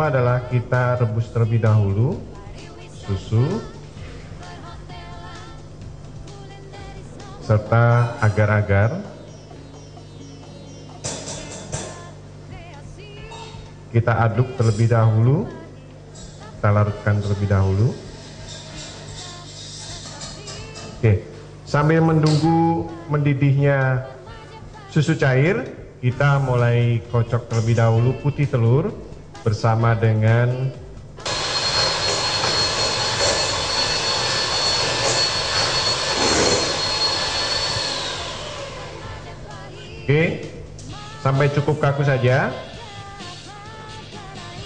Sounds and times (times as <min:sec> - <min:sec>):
Speech: 0:00.0 - 0:02.3, 0:07.4 - 0:09.2, 0:13.3 - 0:15.7, 0:16.6 - 0:18.1, 0:20.5 - 0:24.2, 0:24.9 - 0:30.8, 0:41.2 - 0:42.7
Music: 0:00.0 - 0:44.6.